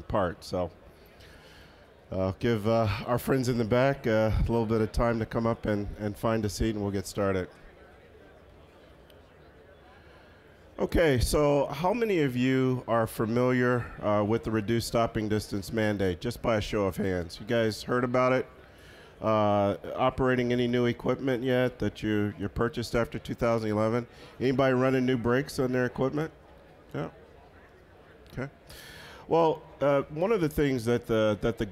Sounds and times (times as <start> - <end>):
Speech: 0.0 - 0.8, 2.1 - 8.6, 10.8 - 18.5, 19.2 - 28.6, 29.3 - 31.7.